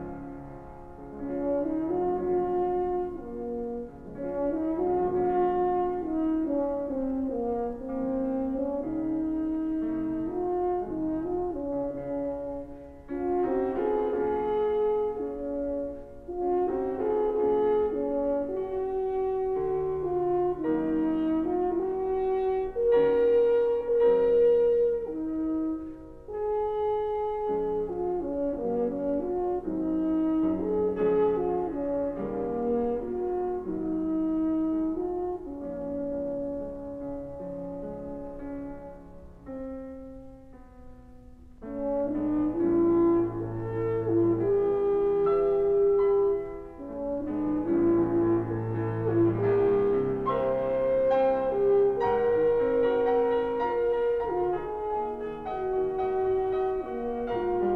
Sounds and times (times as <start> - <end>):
French horn: 0.0 - 57.7.